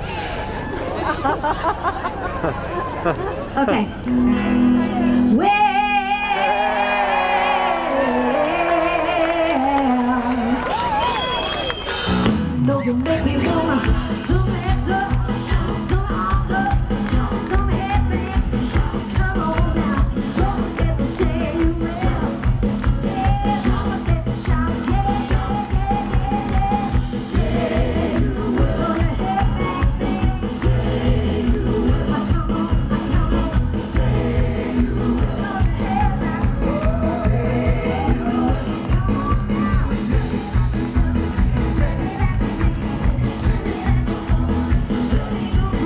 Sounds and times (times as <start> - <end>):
Music: 4.0 - 45.8.